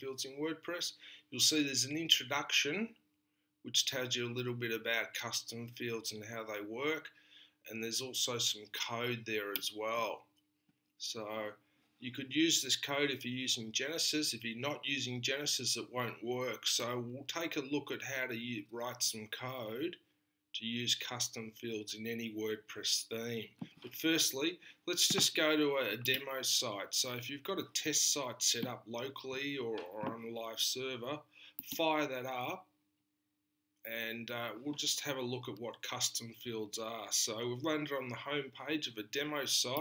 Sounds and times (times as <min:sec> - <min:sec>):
Speech: 0:00.0 - 0:03.0, 0:03.6 - 0:10.3, 0:11.0 - 0:20.0, 0:20.6 - 0:32.7, 0:33.9 - 0:39.8.